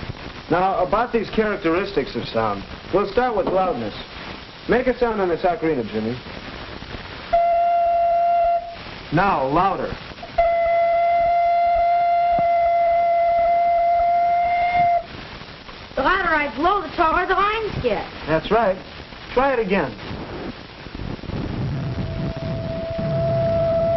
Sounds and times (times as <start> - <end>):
Music: 10.4 - 15.1, 22.0 - 23.9.